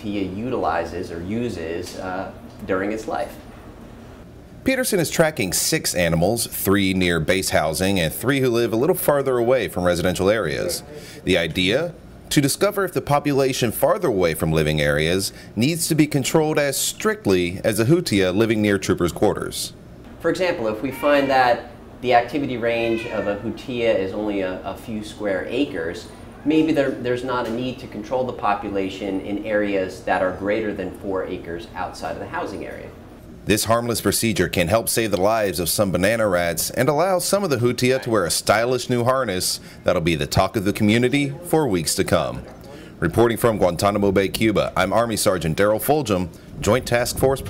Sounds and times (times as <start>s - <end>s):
Speech: 0.0s - 3.4s, 4.6s - 47.4s.